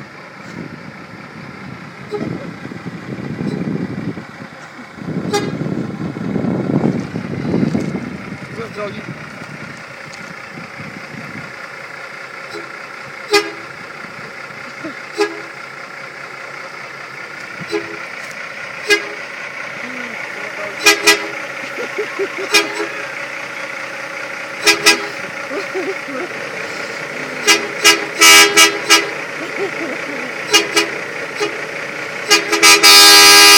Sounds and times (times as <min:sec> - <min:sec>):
Truck: 0:00.0 - 0:33.5.